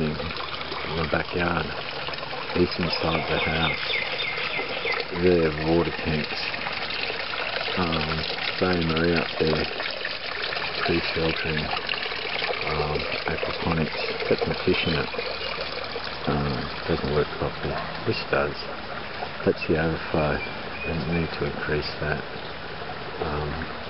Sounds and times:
Speech: 0.0 - 1.8, 2.6 - 3.8, 5.1 - 6.6, 7.8 - 9.7, 10.8 - 11.8, 12.6 - 15.1, 16.3 - 18.7, 19.4 - 22.2, 23.2 - 23.7
Stream: 0.0 - 23.8.

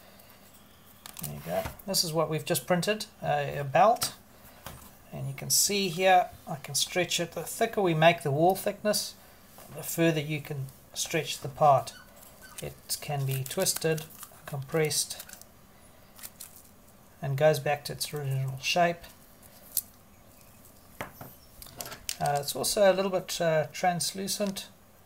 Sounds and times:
Speech: 1.2 - 4.2, 5.1 - 12.0, 12.6 - 15.3, 17.2 - 19.2, 22.2 - 24.8.

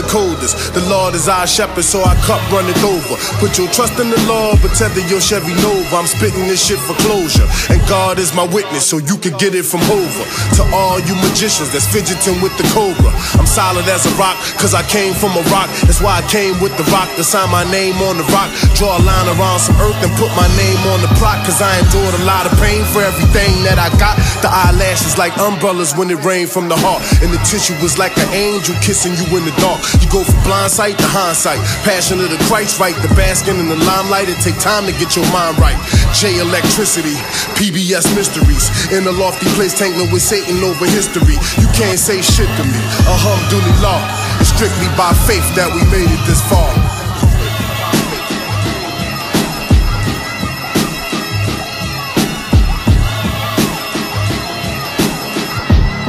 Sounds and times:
Electronica: 9.4 - 56.0.

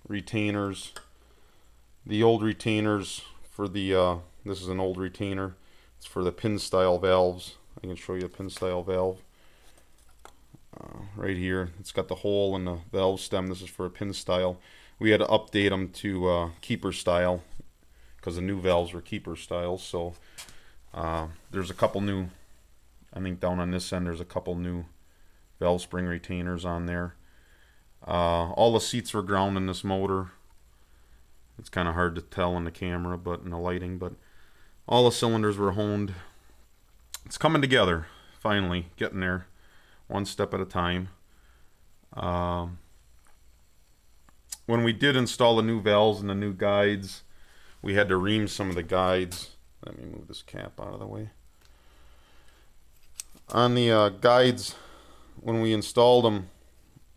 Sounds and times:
Speech: 0.0 - 1.0, 2.0 - 9.3, 10.7 - 20.2, 20.9 - 22.4, 23.1 - 25.0, 25.6 - 27.2, 28.0 - 30.4, 31.6 - 34.2, 34.9 - 36.4, 37.2 - 39.5, 40.1 - 41.2, 42.1 - 42.9, 44.5 - 51.4, 53.5 - 56.6.

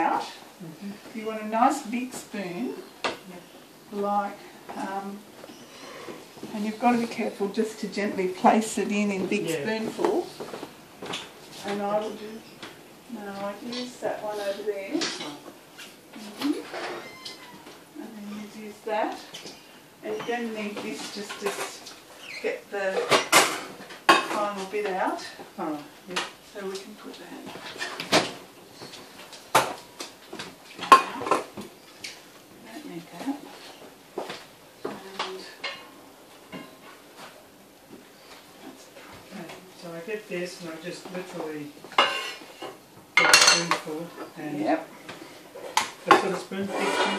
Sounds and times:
Inside, small room: 0.0 - 47.1.

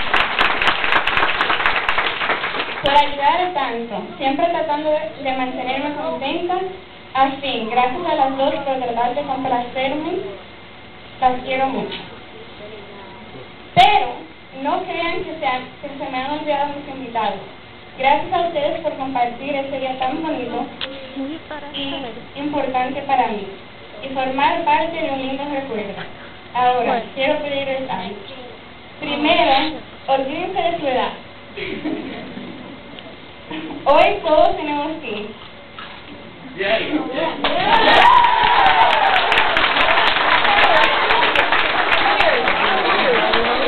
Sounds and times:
Female speech, woman speaking: 2.9 - 10.4, 11.2 - 13.2, 13.8 - 31.2, 33.8 - 35.4, 36.7 - 37.5.

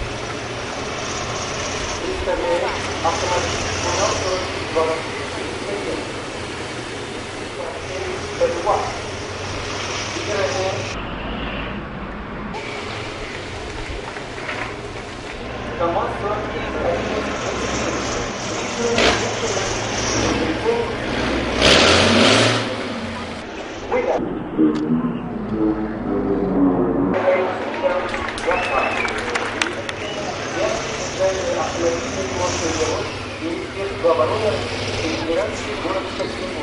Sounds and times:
Truck: 0.0 - 36.6
Speech: 2.0 - 6.2, 7.6 - 9.0, 10.2 - 11.0, 15.8 - 21.0, 23.9 - 36.6.

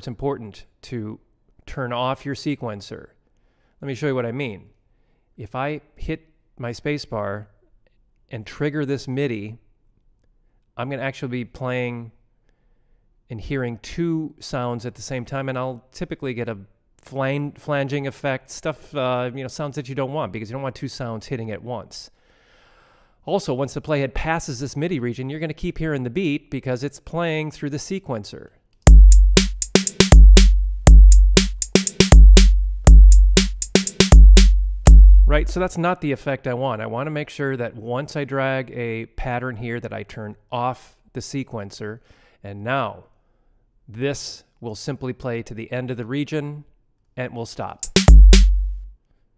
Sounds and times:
Drum: 28.9 - 35.7, 47.8 - 48.9.

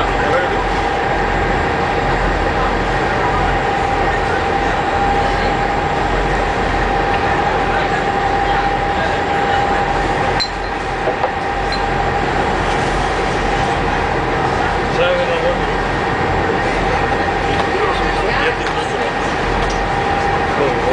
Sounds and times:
Speech: 0.0 - 1.3, 1.9 - 10.4, 14.8 - 20.9.

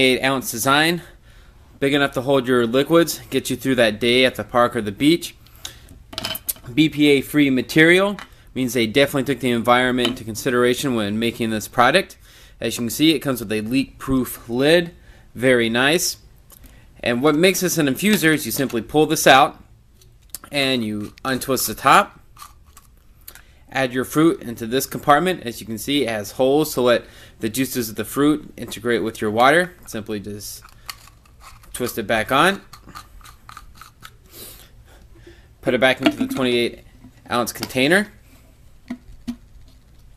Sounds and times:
Speech: 0.0 - 1.1, 1.8 - 5.4, 6.7 - 16.2, 17.0 - 19.6, 20.4 - 22.2, 23.7 - 30.6, 31.8 - 32.7, 35.6 - 38.2.

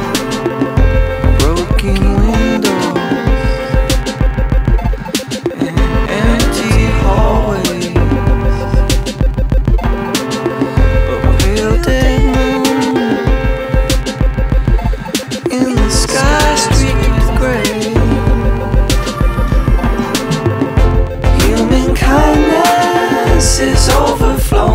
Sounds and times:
Music: 0.0 - 24.7.

